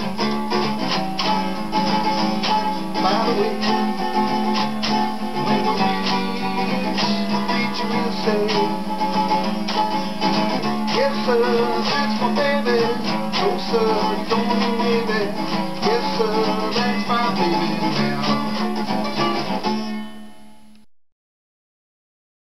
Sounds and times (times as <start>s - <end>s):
Bowed string instrument: 0.0s - 20.8s
Country: 0.0s - 20.8s
Guitar: 0.0s - 20.9s
Singing: 5.4s - 8.8s, 10.9s - 18.6s.